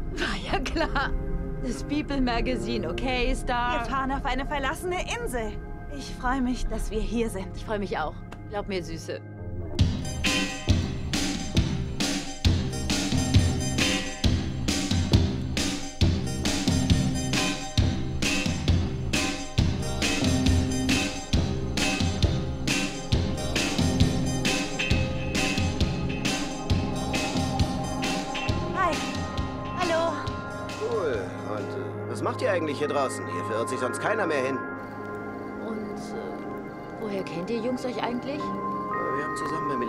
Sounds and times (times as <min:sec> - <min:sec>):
Music: 0:00.0 - 0:39.8.